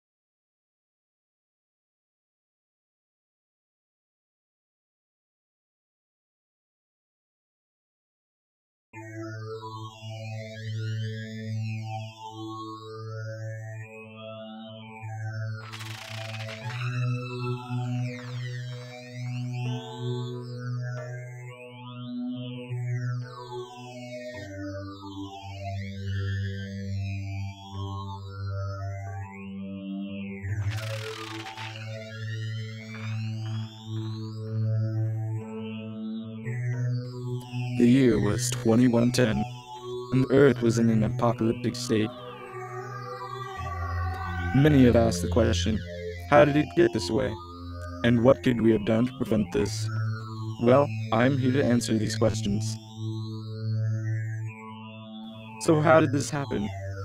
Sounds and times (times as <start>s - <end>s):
Music: 9.0s - 57.0s.